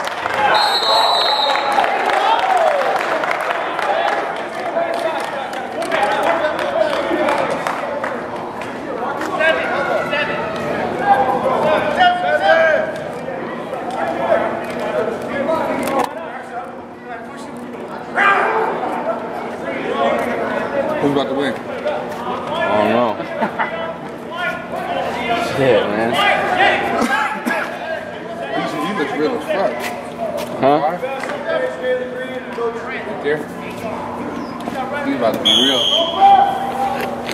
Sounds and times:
Crowd: 0.0s - 37.3s
Hubbub, speech noise, speech babble: 0.0s - 37.3s.

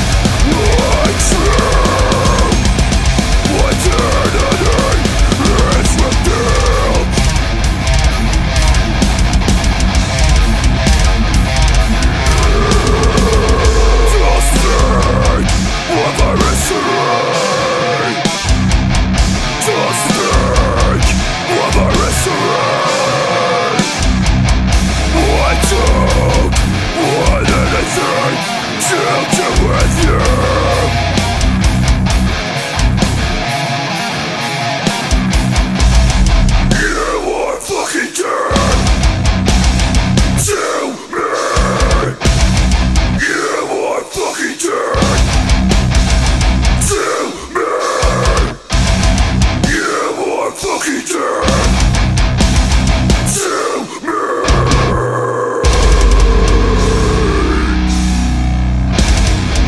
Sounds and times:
Heavy metal: 0.0s - 59.6s.

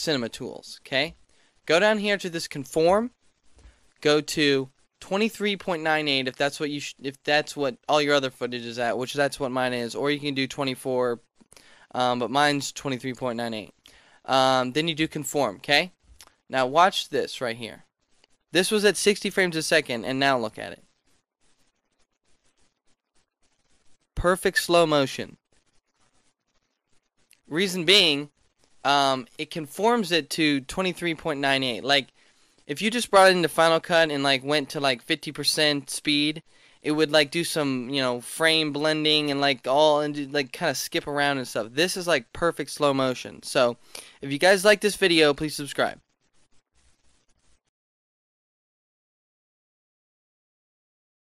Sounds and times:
Speech: 0.0s - 3.1s, 4.0s - 11.2s, 11.9s - 17.8s, 18.6s - 20.8s, 24.2s - 25.4s, 27.5s - 28.3s, 28.9s - 32.1s, 32.7s - 46.0s.

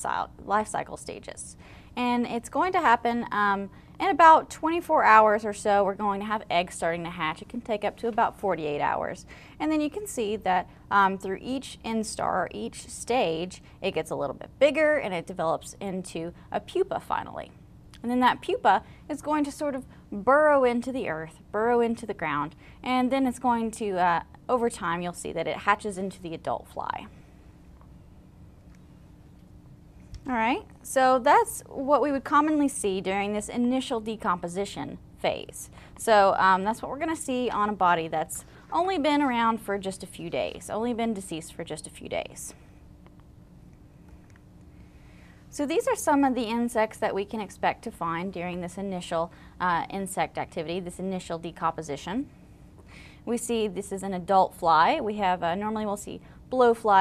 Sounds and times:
Speech: 0.0s - 27.1s, 30.3s - 42.6s, 45.6s - 52.3s, 53.3s - 57.0s.

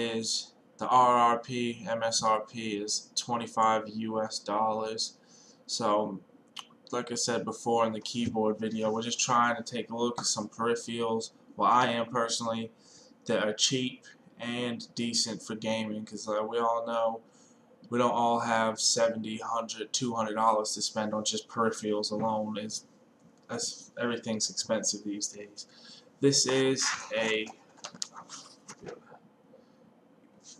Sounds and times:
Speech: 0.0s - 6.2s, 6.9s - 17.2s, 17.9s - 22.8s, 23.5s - 29.0s.

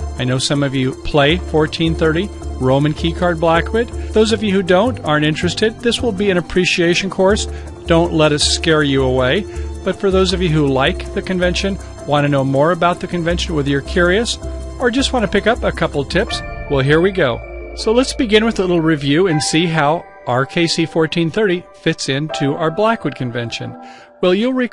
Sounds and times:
Music: 0.0s - 24.7s
Speech: 0.2s - 24.7s.

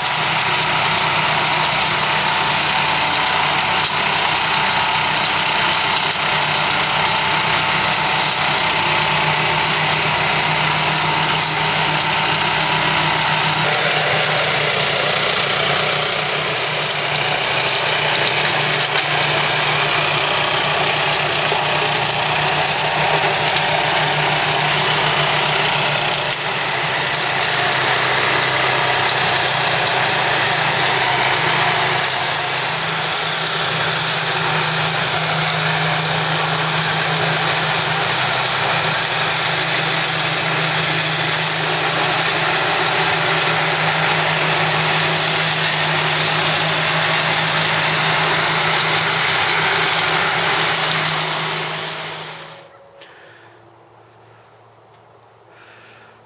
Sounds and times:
Lawn mower: 0.0s - 53.5s, 54.2s - 56.1s.

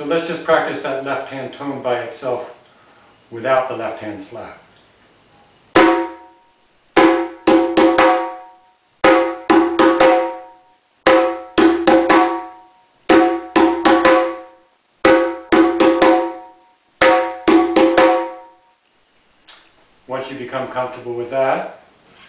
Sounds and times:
Drum: 5.7s - 18.6s.

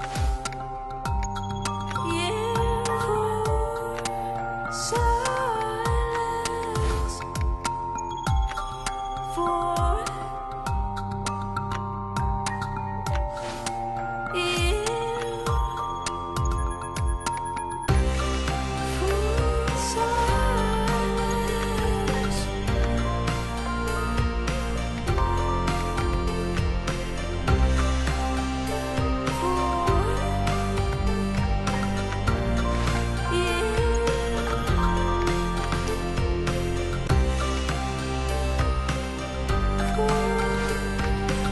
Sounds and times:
Music: 0.0s - 41.5s.

